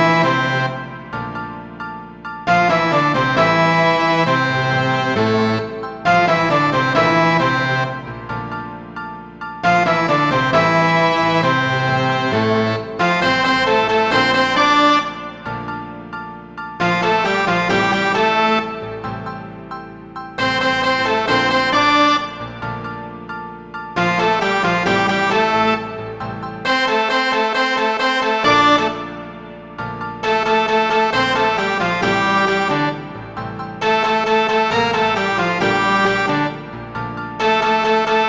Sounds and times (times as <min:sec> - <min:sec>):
Musical instrument: 0:00.0 - 0:38.2.